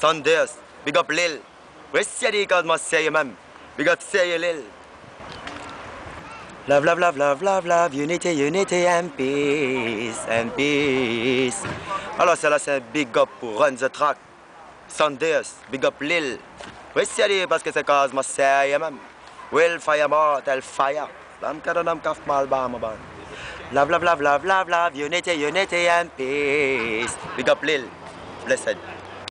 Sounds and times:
Speech: 17.0s - 23.0s, 23.7s - 29.3s.

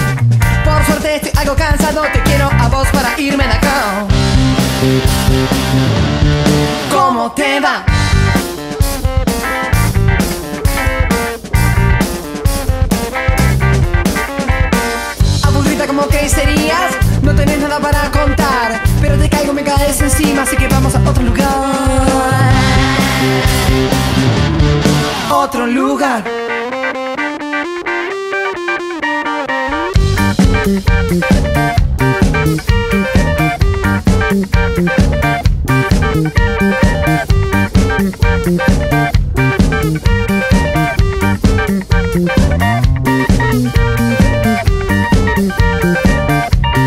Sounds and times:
Electronic music: 0.0s - 46.8s.

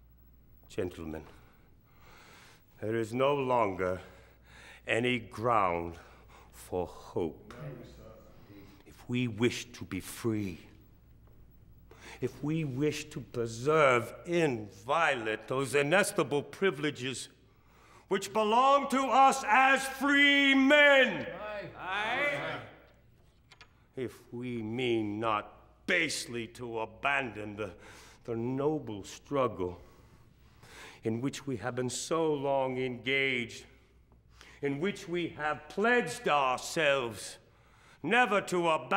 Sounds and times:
Narration, monologue: 0.0s - 38.9s
Male speech, man speaking: 0.7s - 1.4s, 2.8s - 4.2s, 4.9s - 6.0s, 6.6s - 10.8s, 12.2s - 17.4s, 18.1s - 22.8s, 24.0s - 29.8s, 31.0s - 33.8s, 34.6s - 37.4s, 38.0s - 38.9s.

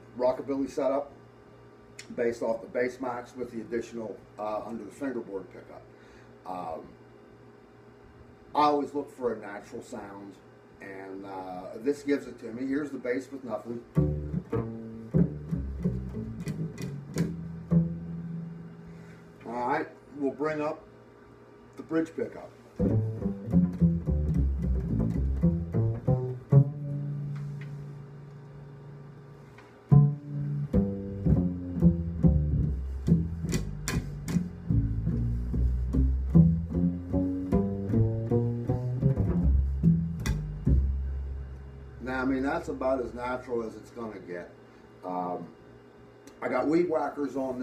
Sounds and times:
Speech: 0.2s - 1.2s, 2.0s - 7.0s, 8.5s - 14.0s, 19.4s - 20.9s, 21.8s - 22.6s, 42.0s - 45.6s, 46.3s - 47.6s
Music: 13.9s - 19.0s, 22.8s - 28.9s, 29.9s - 41.9s.

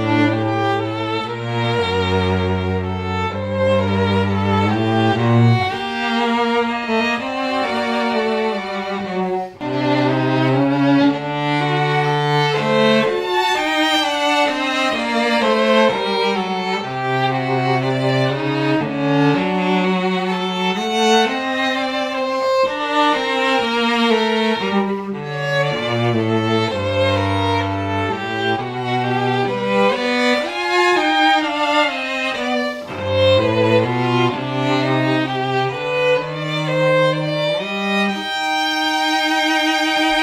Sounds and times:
Cello: 0.0s - 40.2s
Violin, fiddle: 0.0s - 40.2s.

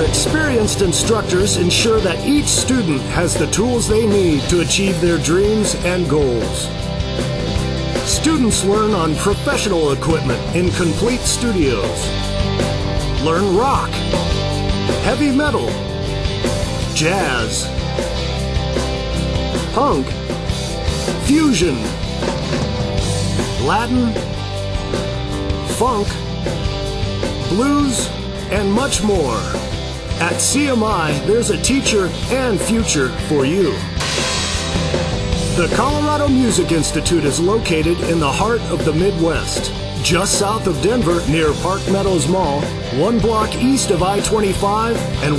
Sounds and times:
Speech: 0.0s - 6.7s, 8.0s - 12.2s, 13.2s - 14.1s, 15.0s - 15.8s, 16.9s - 17.7s, 19.7s - 20.2s, 21.2s - 22.0s, 23.6s - 24.4s, 25.7s - 26.2s, 27.4s - 29.6s, 30.2s - 33.9s, 35.6s - 45.3s
Music: 0.0s - 45.3s.

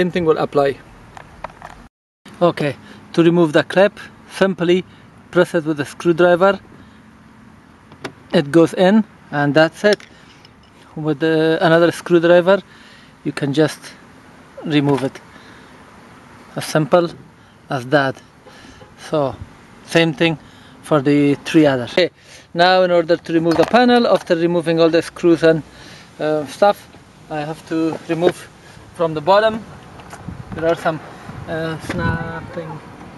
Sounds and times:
Speech: 0.0s - 0.8s, 2.4s - 6.6s, 8.3s - 10.0s, 10.9s - 14.0s, 14.6s - 15.2s, 16.6s - 18.2s, 19.0s - 29.7s, 30.6s - 32.9s.

